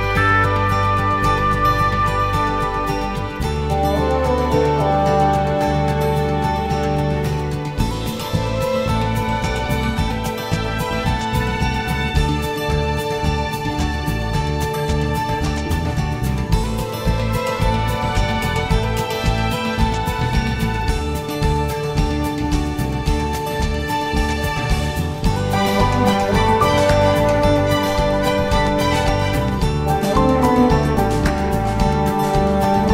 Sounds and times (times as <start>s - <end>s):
Tender music: 0.0s - 32.9s.